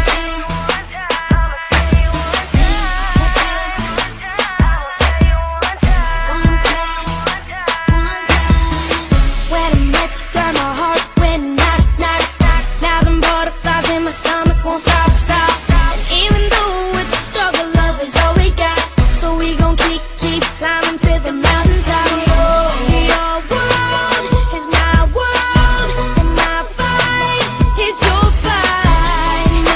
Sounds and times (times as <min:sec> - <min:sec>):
Music: 0:00.0 - 0:29.7.